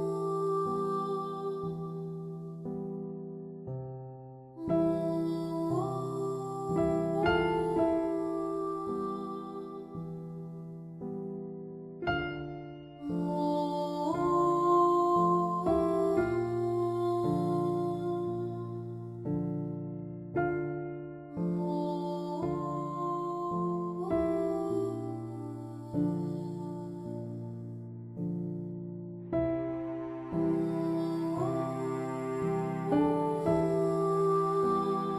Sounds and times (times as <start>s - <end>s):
Background music: 4.6s - 35.1s.